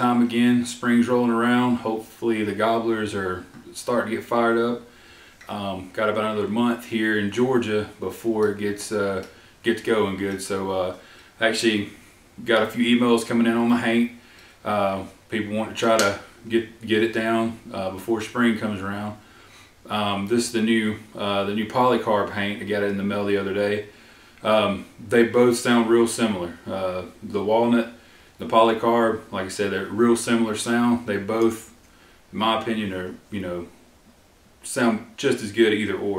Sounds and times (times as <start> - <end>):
Speech: 0.0 - 4.9, 5.5 - 19.2, 19.8 - 33.8, 34.6 - 36.1.